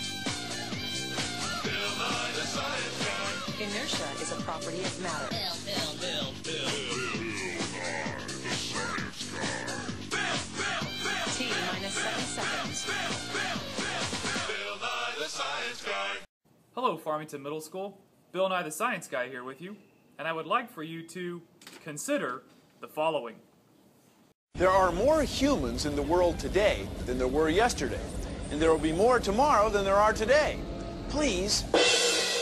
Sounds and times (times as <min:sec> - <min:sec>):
Speech: 0:03.6 - 0:06.8, 0:16.8 - 0:23.4, 0:24.6 - 0:31.7.